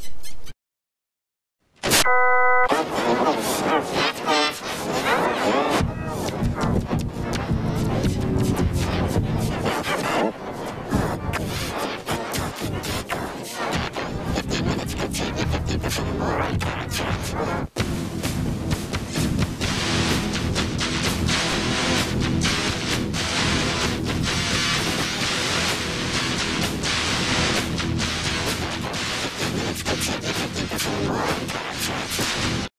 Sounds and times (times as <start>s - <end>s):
Music: 2.7s - 32.7s.